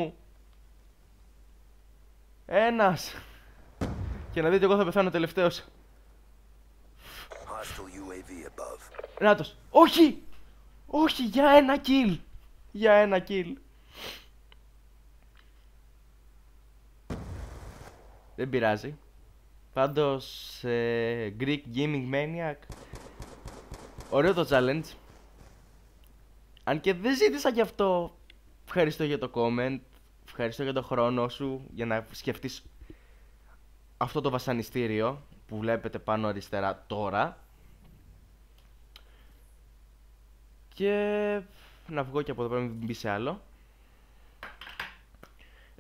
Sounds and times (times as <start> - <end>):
Speech: 2.5 - 3.2, 7.3 - 10.3, 10.9 - 13.6, 18.4 - 19.0, 19.8 - 22.7, 24.1 - 25.0, 26.7 - 32.7, 34.0 - 37.4, 40.8 - 43.5.